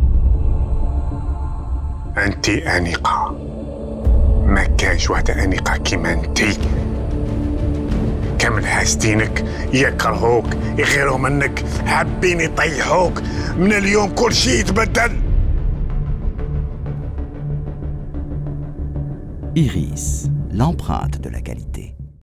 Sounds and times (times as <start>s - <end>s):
Music: 0.0s - 22.2s
Speech: 2.2s - 3.4s, 4.5s - 6.7s, 8.4s - 15.2s, 19.6s - 22.0s.